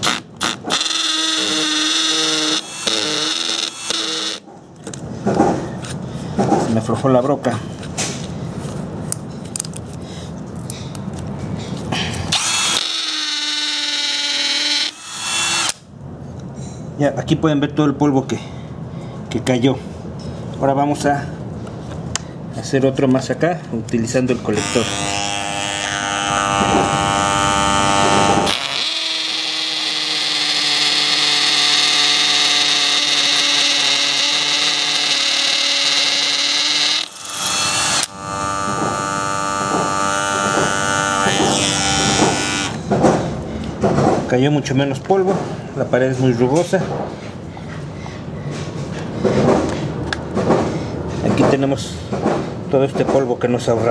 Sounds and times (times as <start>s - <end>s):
Drill: 0.0s - 4.5s, 12.3s - 15.9s, 24.6s - 42.8s
Speech: 6.7s - 7.7s, 17.0s - 18.5s, 19.3s - 19.8s, 20.6s - 21.4s, 22.6s - 24.9s, 44.3s - 47.0s, 51.2s - 52.0s, 52.7s - 53.9s.